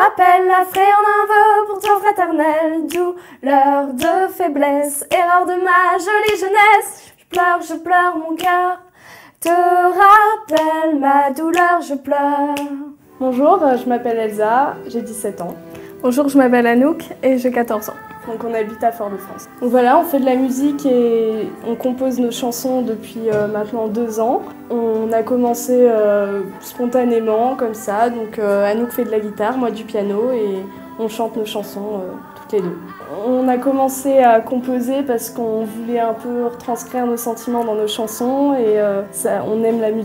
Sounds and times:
Music: 0.0s - 40.0s
Speech: 13.2s - 40.0s.

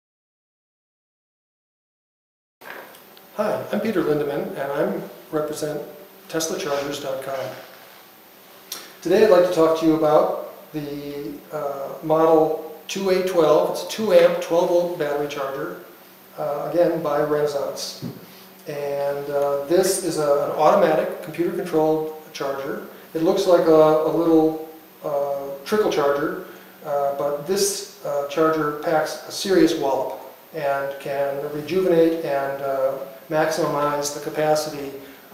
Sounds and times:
Speech: 3.4s - 7.7s, 9.0s - 15.8s, 16.4s - 35.0s.

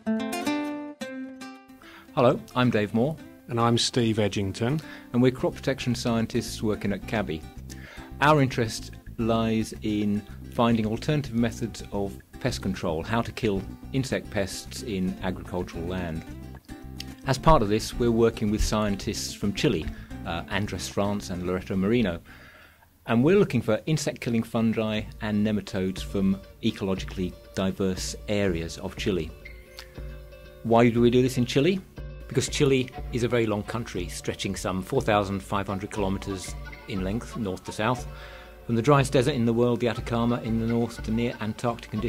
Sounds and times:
Music: 0.0s - 42.0s
Speech: 2.2s - 7.5s, 8.2s - 16.3s, 17.2s - 22.2s, 23.1s - 29.4s, 30.6s - 38.1s, 38.7s - 42.0s.

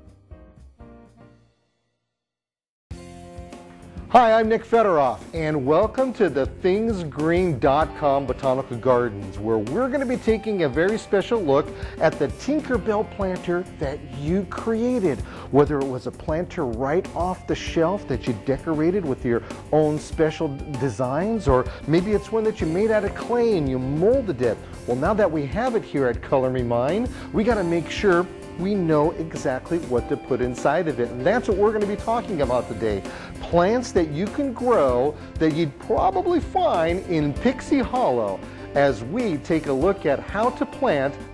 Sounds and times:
Music: 0.0s - 41.3s
Speech: 4.1s - 41.2s.

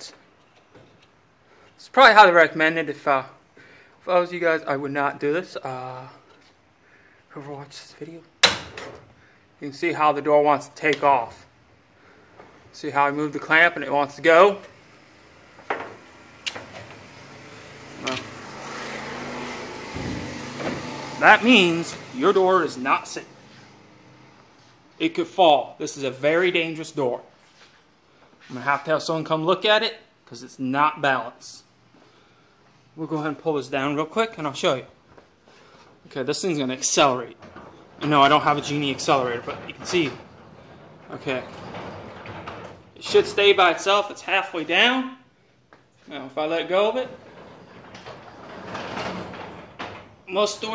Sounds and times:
Speech: 1.8s - 3.4s, 4.0s - 6.3s, 7.3s - 8.3s, 9.6s - 11.5s, 12.8s - 14.7s, 21.2s - 23.3s, 25.0s - 27.3s, 28.5s - 31.7s, 33.0s - 35.0s, 36.1s - 37.4s, 38.0s - 40.2s, 41.1s - 41.6s, 43.0s - 45.3s, 46.0s - 47.2s, 50.3s - 50.7s
Vehicle: 16.0s - 22.3s.

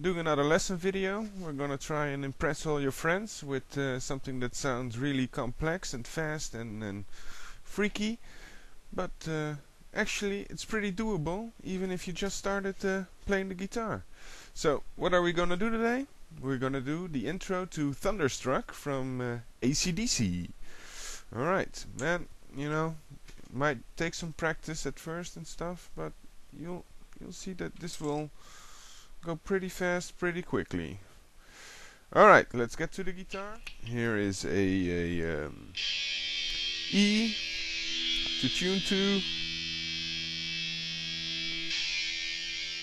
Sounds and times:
Speech: 0.0s - 7.1s, 7.7s - 8.2s, 9.0s - 14.0s, 14.6s - 20.6s, 21.3s - 28.3s, 29.2s - 31.0s, 32.1s - 35.8s, 36.9s - 37.4s, 38.3s - 39.3s.

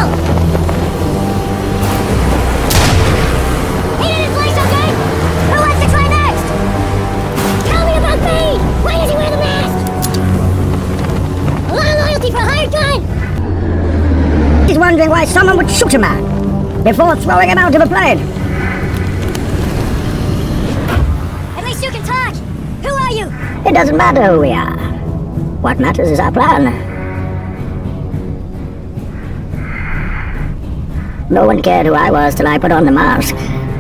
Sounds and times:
Music: 0.0s - 33.8s.

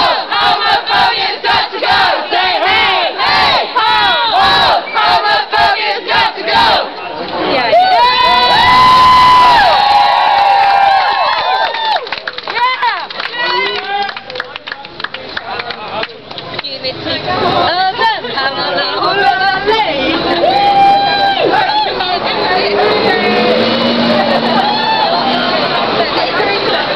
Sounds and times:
Battle cry: 0.0s - 6.9s
Cheering: 0.0s - 14.4s, 19.7s - 26.9s
Crowd: 0.0s - 26.9s.

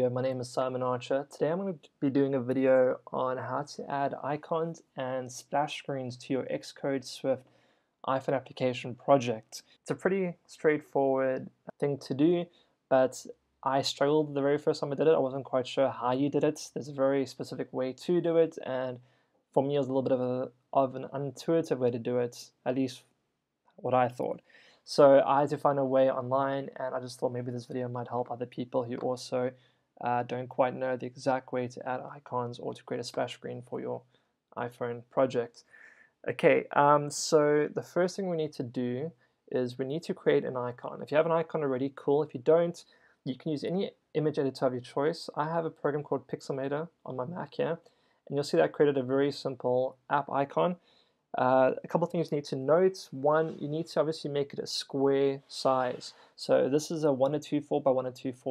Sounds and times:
Speech: 0.0s - 23.1s, 23.8s - 50.8s, 51.4s - 58.5s.

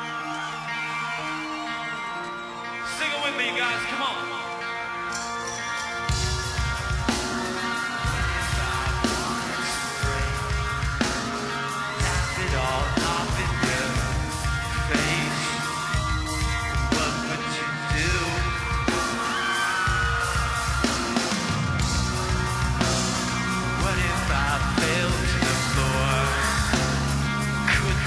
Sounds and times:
Music: 0.0s - 28.0s.

